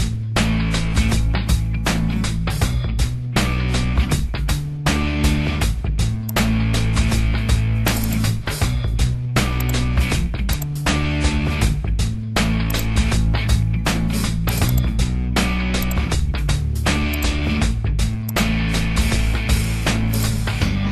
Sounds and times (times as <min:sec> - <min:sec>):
Music: 0:00.0 - 0:20.9.